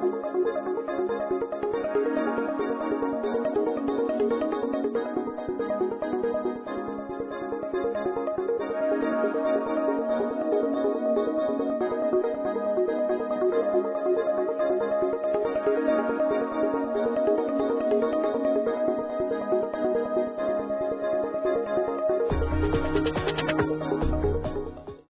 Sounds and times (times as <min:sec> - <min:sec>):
Music: 0:00.0 - 0:25.1.